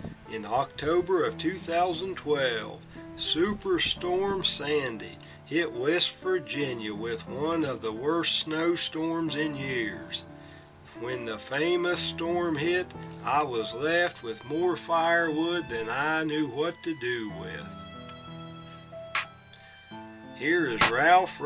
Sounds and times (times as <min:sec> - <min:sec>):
Music: 0:00.0 - 0:21.4
Speech: 0:00.3 - 0:10.2, 0:11.0 - 0:17.8, 0:20.4 - 0:21.4.